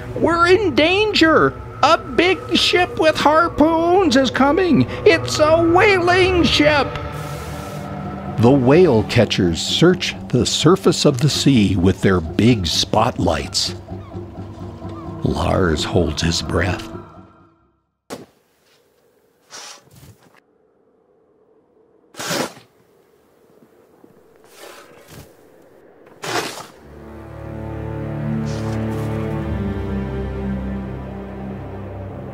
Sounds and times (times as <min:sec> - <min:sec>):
Music: 0:00.0 - 0:18.0, 0:26.8 - 0:32.3
Speech: 0:00.2 - 0:07.0, 0:08.4 - 0:13.8, 0:15.2 - 0:17.0.